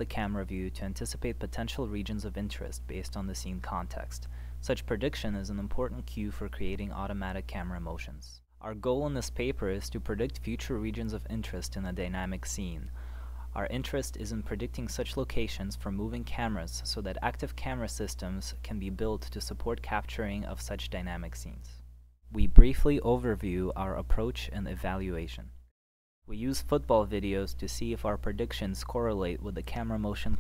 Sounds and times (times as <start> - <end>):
Speech: 0.0 - 25.6, 26.3 - 30.4.